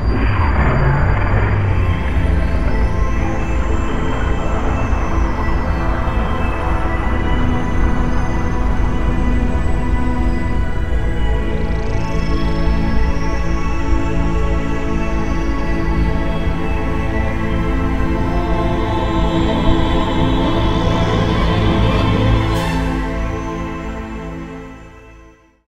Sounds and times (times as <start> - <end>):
Music: 0.0 - 25.7.